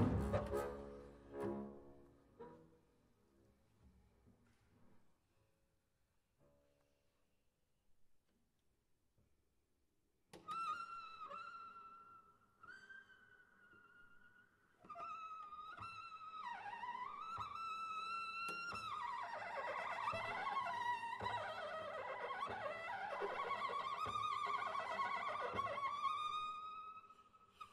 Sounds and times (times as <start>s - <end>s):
Bowed string instrument: 0.0s - 3.0s, 14.8s - 27.7s.